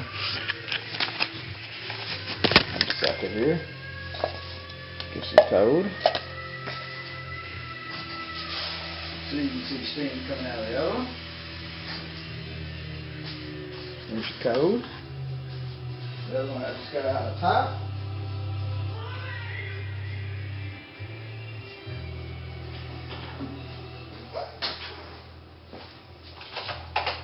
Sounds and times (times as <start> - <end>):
Music: 0.0 - 27.2
Speech: 5.2 - 6.0, 9.3 - 11.2, 14.1 - 14.9, 16.3 - 17.8.